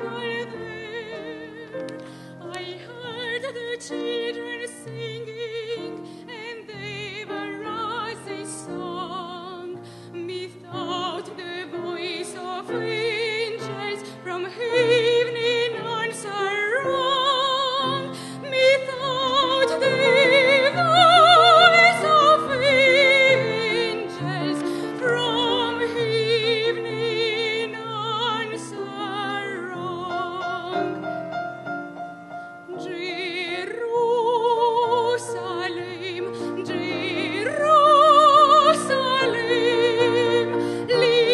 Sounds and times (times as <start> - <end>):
Music: 0.0 - 41.3.